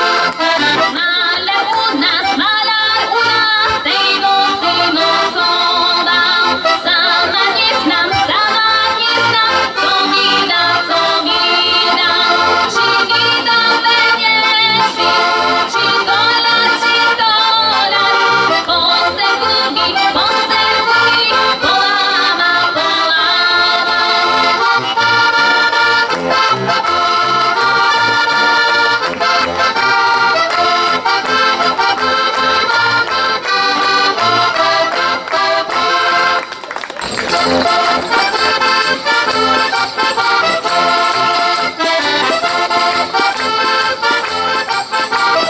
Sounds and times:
Accordion: 0.0 - 45.5.

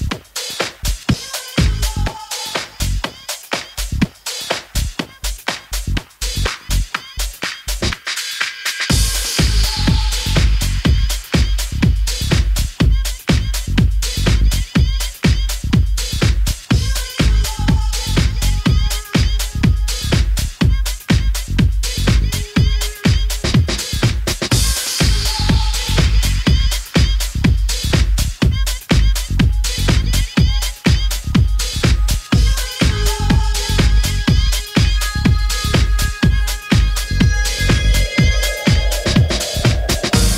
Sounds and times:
Music: 0.0 - 40.3.

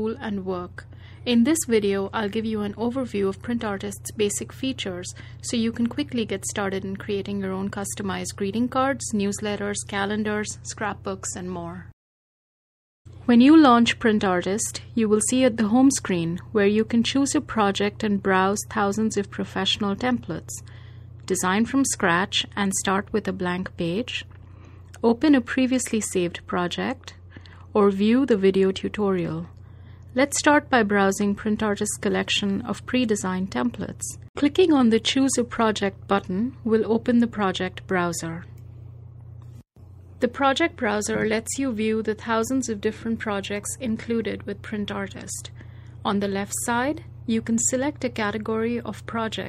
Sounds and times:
Inside, small room: 0.0 - 12.0, 13.1 - 49.4
Speech: 0.0 - 12.0, 13.2 - 20.7, 21.3 - 24.3, 25.0 - 29.5, 30.2 - 38.6, 40.2 - 49.4.

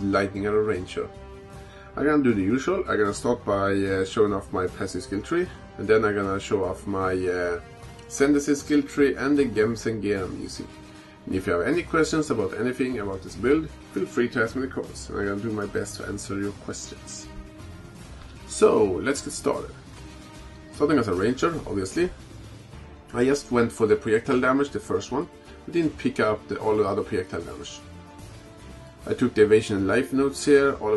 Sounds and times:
Speech: 0.0 - 1.1, 2.0 - 10.7, 11.3 - 17.4, 18.5 - 19.8, 20.8 - 22.2, 23.1 - 27.9, 29.1 - 30.9
Music: 0.0 - 30.9.

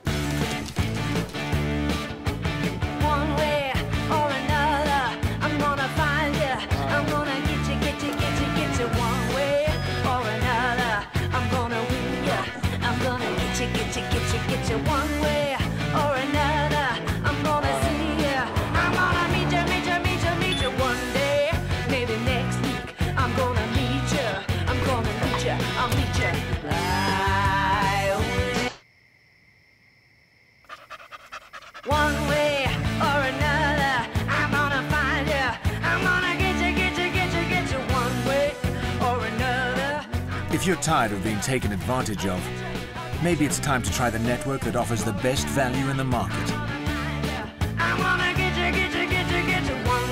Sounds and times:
Music: 0.0 - 28.8, 31.9 - 50.1
Yip: 30.6 - 31.9.

